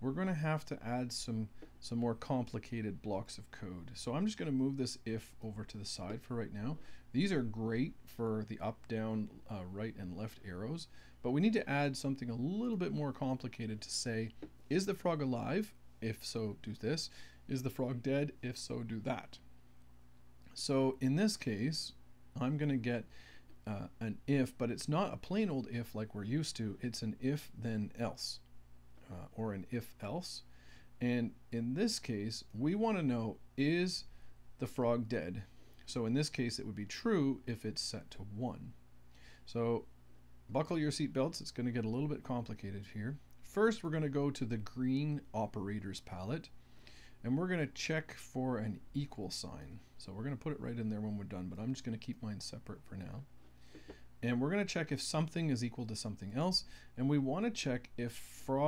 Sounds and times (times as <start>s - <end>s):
Speech: 0.0s - 19.4s, 20.5s - 38.8s, 39.5s - 39.9s, 40.5s - 46.6s, 47.2s - 53.3s, 54.2s - 58.6s.